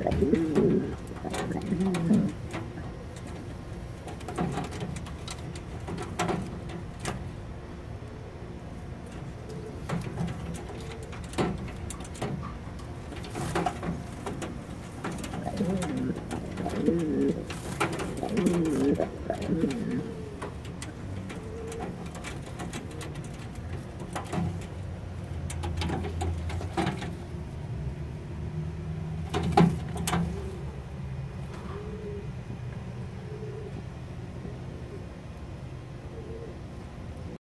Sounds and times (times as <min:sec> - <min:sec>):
Pigeon, dove: 0:00.0 - 0:07.2, 0:09.1 - 0:24.8, 0:31.5 - 0:37.4.